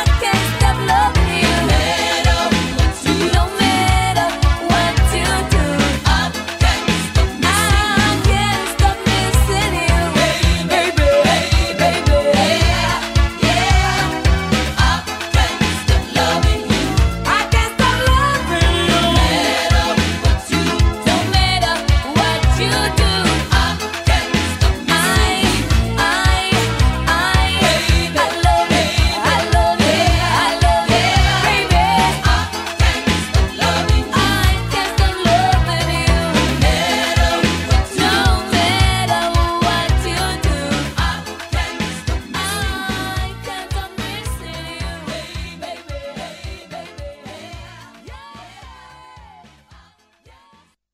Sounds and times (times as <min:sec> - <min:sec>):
Music of Africa: 0:00.0 - 0:50.8.